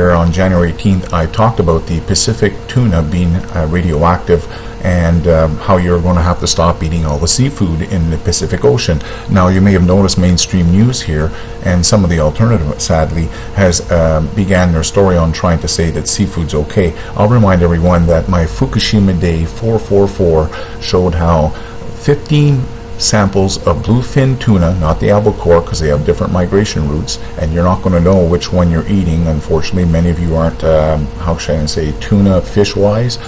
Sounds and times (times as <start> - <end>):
Speech: 0.0 - 33.2.